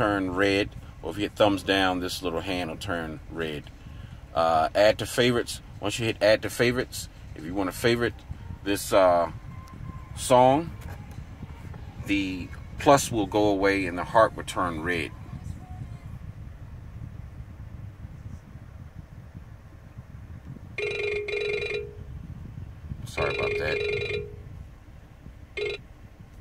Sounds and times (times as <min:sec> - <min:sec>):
Vehicle: 0:00.0 - 0:26.4.